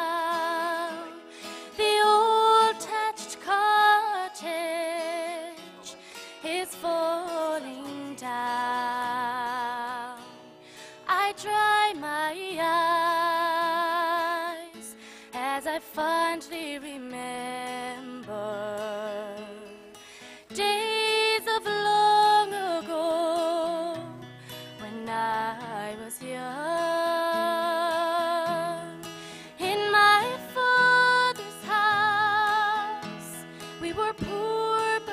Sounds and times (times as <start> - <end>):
Female singing: 0.0 - 1.2, 1.8 - 10.3, 11.1 - 19.7, 20.5 - 24.2, 24.8 - 29.0, 29.6 - 35.1
Music: 0.0 - 35.1.